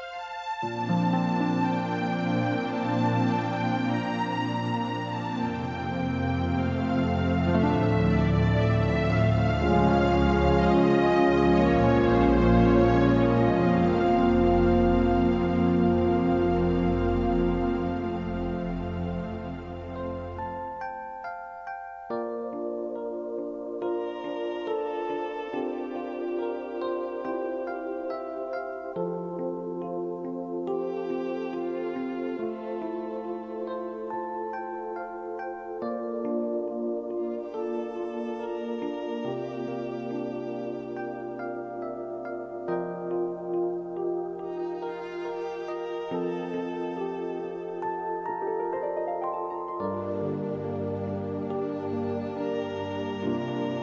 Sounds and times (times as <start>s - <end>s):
Music: 0.0s - 53.8s.